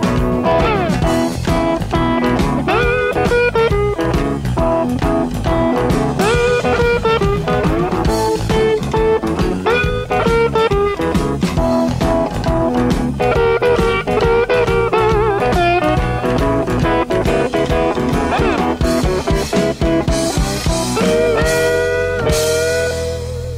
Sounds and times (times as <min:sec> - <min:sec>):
Music: 0:00.0 - 0:23.5.